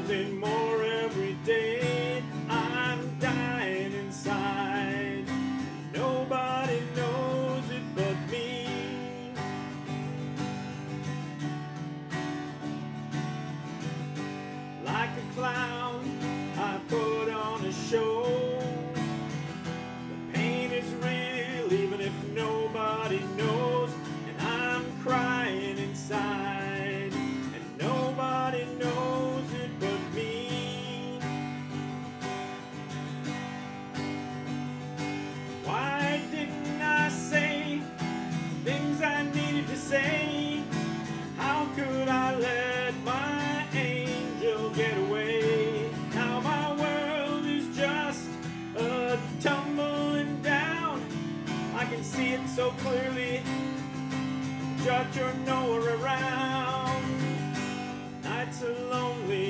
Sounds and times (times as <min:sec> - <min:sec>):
Strum: 0:00.0 - 0:59.4.